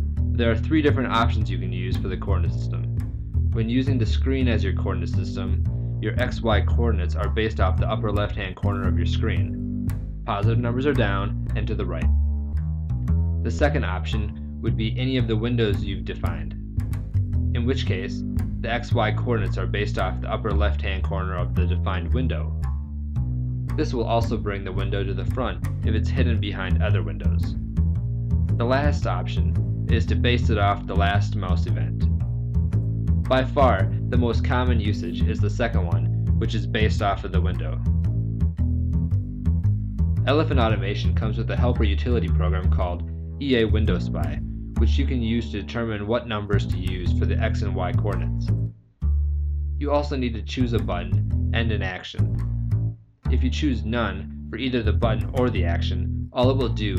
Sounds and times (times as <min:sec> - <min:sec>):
Music: 0:00.0 - 0:56.9
Speech: 0:00.4 - 0:02.9, 0:03.6 - 0:09.6, 0:10.3 - 0:12.1, 0:13.5 - 0:16.6, 0:17.6 - 0:22.6, 0:23.8 - 0:27.6, 0:28.6 - 0:32.1, 0:33.3 - 0:37.8, 0:40.3 - 0:48.5, 0:49.8 - 0:52.4, 0:53.3 - 0:56.9.